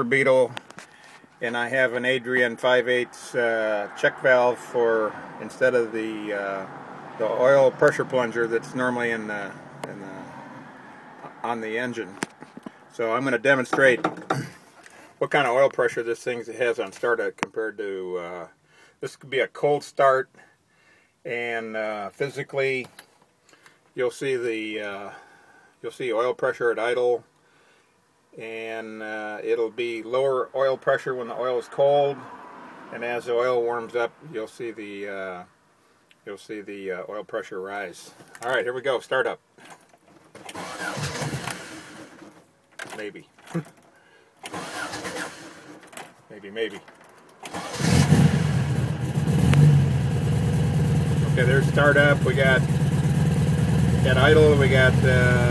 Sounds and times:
Speech: 0.0s - 0.6s, 1.4s - 10.3s, 11.2s - 12.2s, 12.9s - 14.1s, 15.2s - 20.4s, 21.3s - 22.9s, 24.0s - 25.2s, 25.8s - 27.3s, 28.4s - 32.2s, 32.9s - 35.5s, 36.2s - 39.4s, 42.8s - 43.7s, 46.3s - 46.9s, 51.2s - 52.7s, 54.0s - 55.5s.

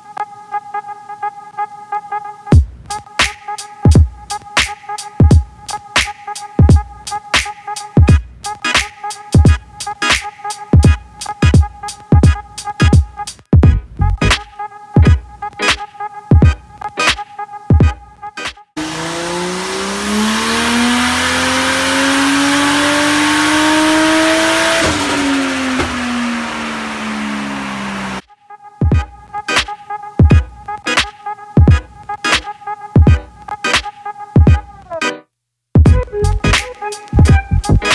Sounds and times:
Music: 0.0s - 18.8s, 28.2s - 37.9s
Car: 18.8s - 28.2s.

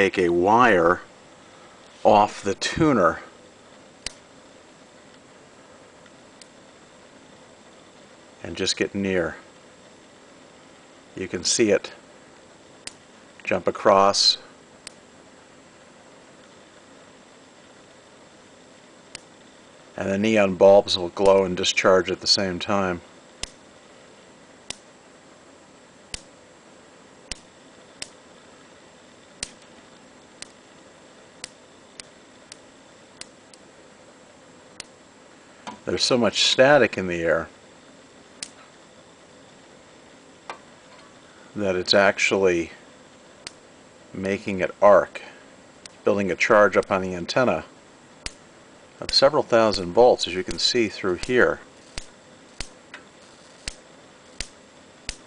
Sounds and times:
Speech: 0.0s - 1.1s, 2.0s - 3.3s, 8.4s - 9.5s, 11.2s - 12.0s, 13.4s - 14.5s, 20.0s - 23.0s, 35.8s - 37.5s, 41.6s - 42.8s, 44.2s - 45.4s, 46.0s - 47.7s, 49.0s - 51.6s.

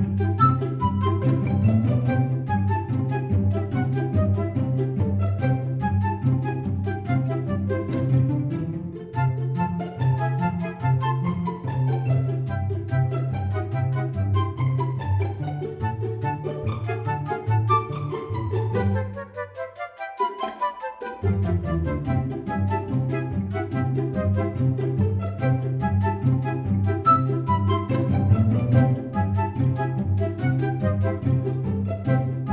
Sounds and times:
Music: 0.0s - 32.5s.

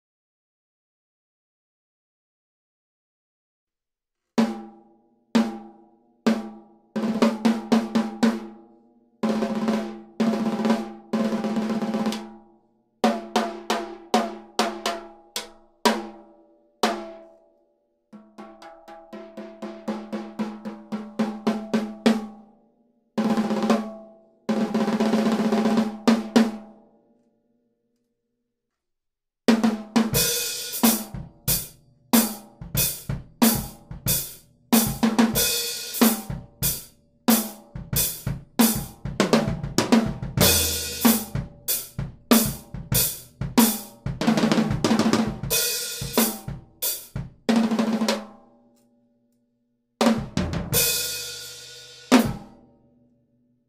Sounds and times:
Drum kit: 6.3s - 8.6s, 9.2s - 12.4s, 13.0s - 16.2s, 16.8s - 17.2s, 18.2s - 22.4s, 23.2s - 26.7s, 29.5s - 48.4s, 50.0s - 52.6s
Drum: 18.2s - 22.4s, 29.5s - 48.4s, 50.0s - 52.6s.

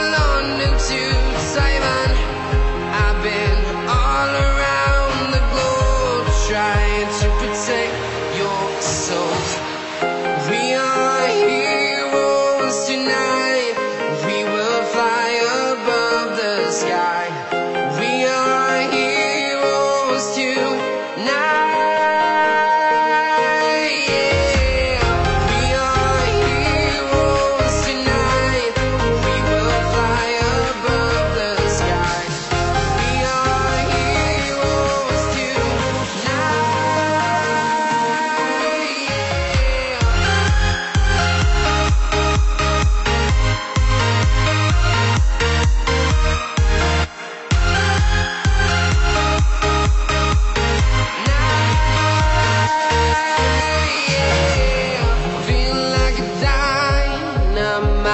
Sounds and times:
Music: 0.0s - 58.1s.

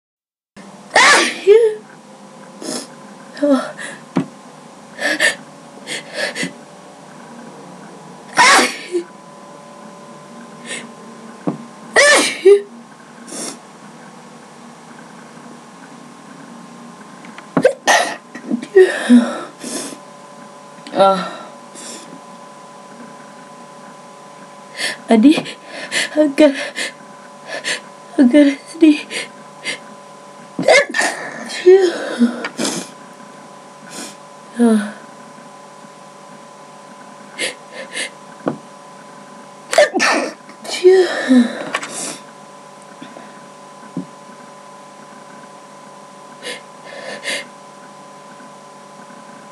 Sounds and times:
Sneeze: 1.0s - 1.4s, 8.4s - 9.0s.

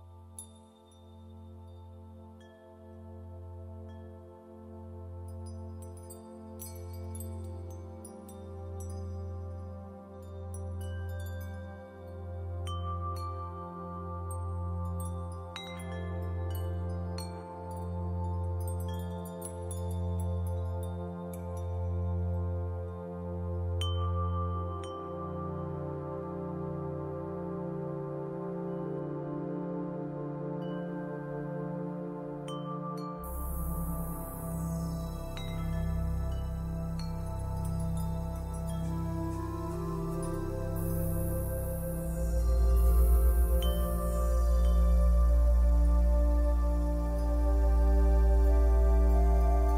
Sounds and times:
Glass: 0.1s - 4.5s, 5.3s - 23.0s, 23.6s - 26.0s, 32.4s - 49.7s.

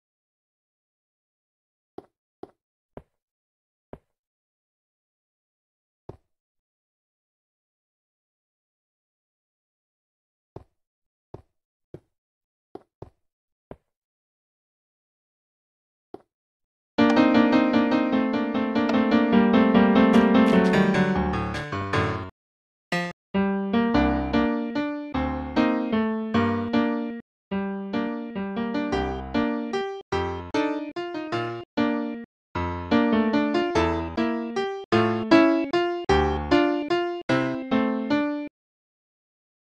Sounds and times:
Music: 17.0s - 22.3s, 23.0s - 38.5s.

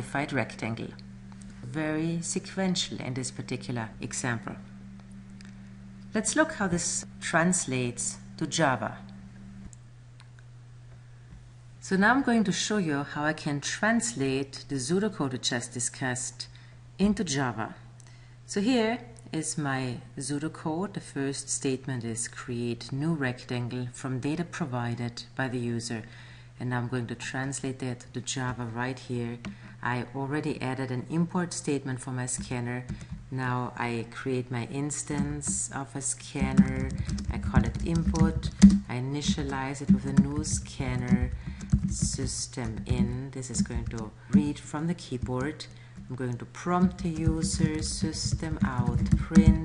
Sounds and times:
Speech: 0.0s - 1.0s, 1.6s - 4.7s, 6.1s - 9.1s, 11.8s - 17.8s, 18.5s - 49.6s.

